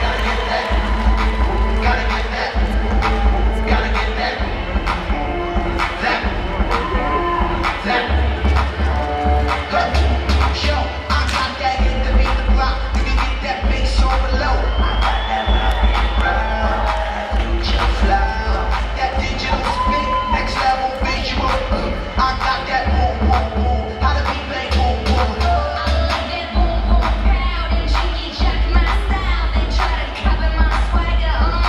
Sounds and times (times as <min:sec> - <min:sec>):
Cheering: 0:00.0 - 0:31.0
Crowd: 0:00.0 - 0:31.6.